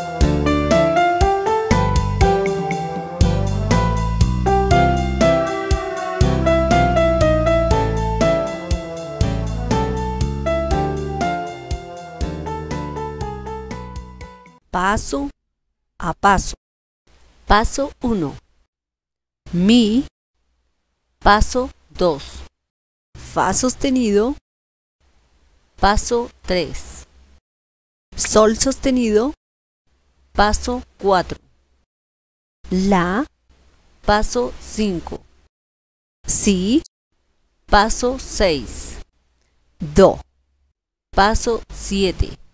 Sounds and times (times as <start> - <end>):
Piano: 0.0 - 14.6.